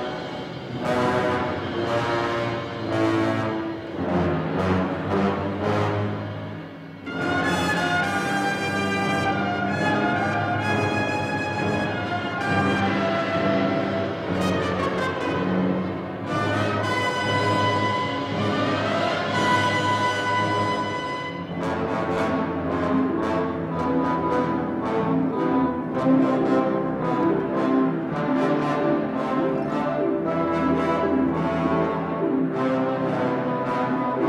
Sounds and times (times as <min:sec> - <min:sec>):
French horn: 0:00.0 - 0:34.2.